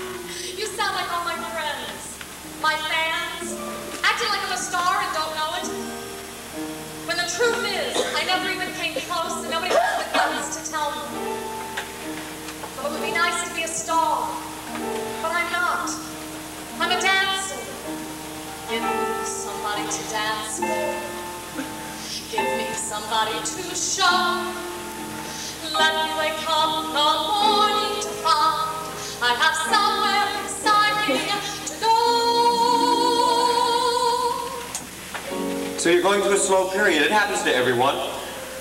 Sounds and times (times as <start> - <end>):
Music: 0.0 - 38.6.